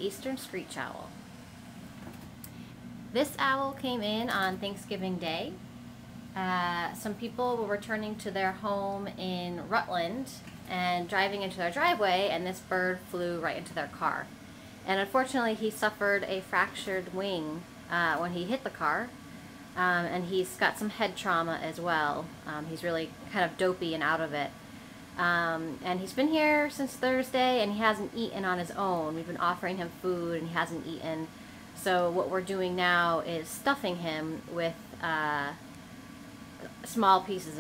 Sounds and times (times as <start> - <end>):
Speech: 0.0 - 1.2, 3.2 - 5.6, 6.4 - 14.3, 14.9 - 19.1, 19.8 - 24.5, 25.2 - 35.6, 36.6 - 37.6.